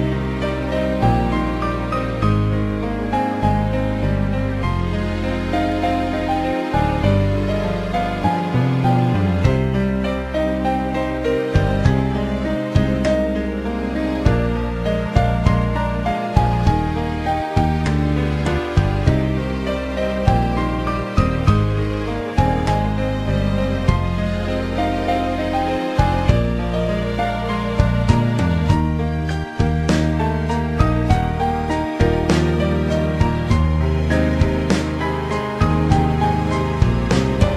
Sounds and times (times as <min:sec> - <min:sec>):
Music: 0:00.0 - 0:37.5.